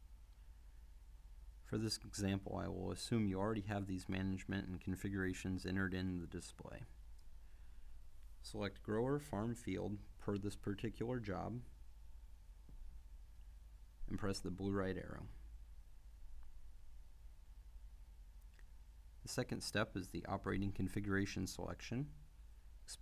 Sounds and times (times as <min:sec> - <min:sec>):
Speech: 0:01.7 - 0:07.0, 0:08.4 - 0:11.7, 0:14.0 - 0:15.4, 0:19.2 - 0:22.2.